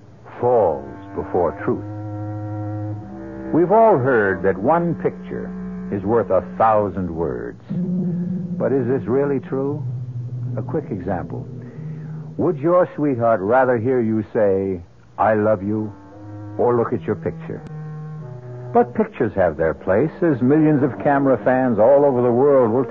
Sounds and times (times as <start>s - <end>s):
Speech: 0.3s - 1.8s, 3.5s - 7.8s, 8.6s - 9.8s, 10.6s - 11.5s, 12.4s - 15.9s, 16.6s - 17.6s, 18.8s - 22.9s.